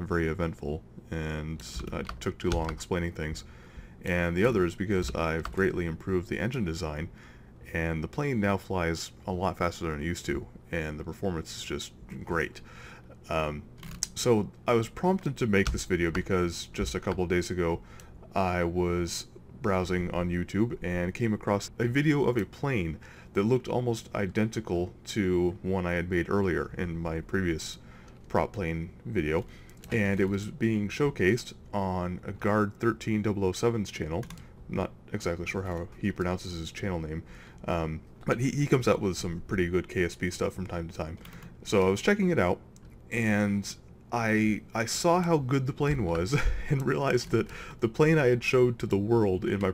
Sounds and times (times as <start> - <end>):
Speech: 0.0 - 12.6, 13.2 - 49.7.